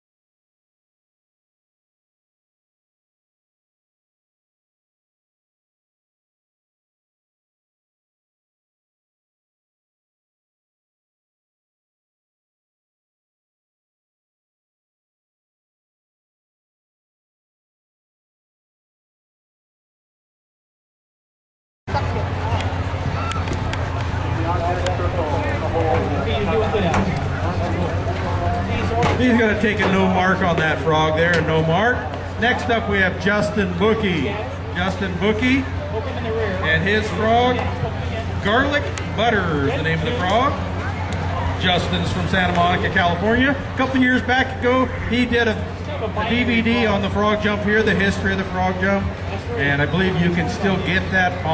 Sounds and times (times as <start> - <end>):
Speech: 23.9 - 51.5.